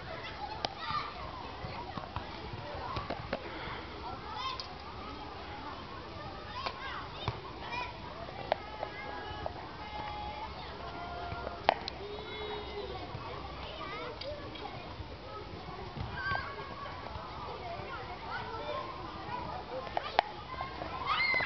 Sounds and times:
Speech: 0.0s - 21.4s.

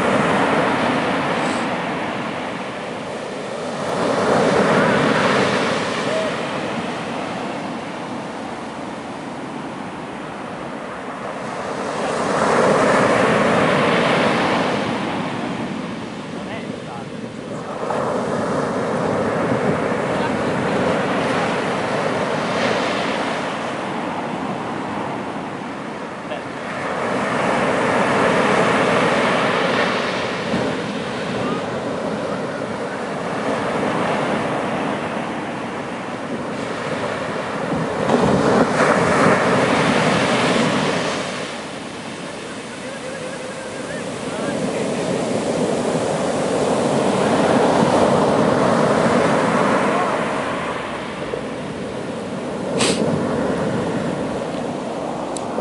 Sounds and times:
Waves, surf: 0.0s - 55.6s
Speech: 16.4s - 17.2s, 26.3s - 26.5s, 42.8s - 45.2s.

